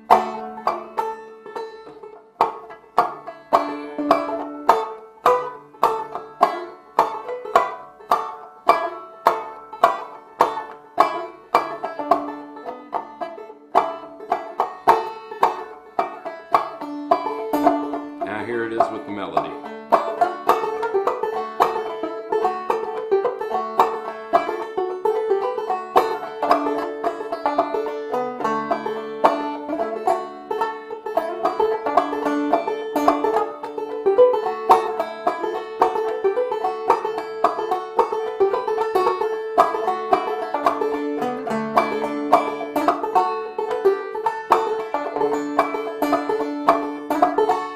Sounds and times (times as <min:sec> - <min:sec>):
Banjo: 0:00.0 - 0:47.7.